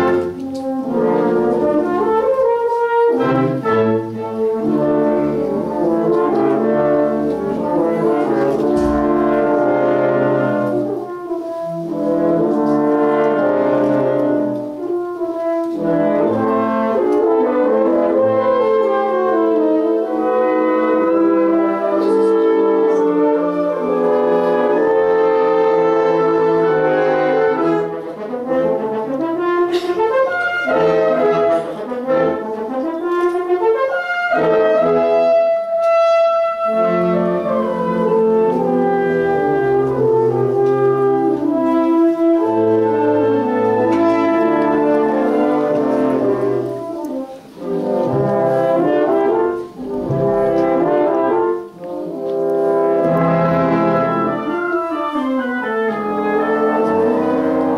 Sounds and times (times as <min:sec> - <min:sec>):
French horn: 0:00.0 - 0:57.7.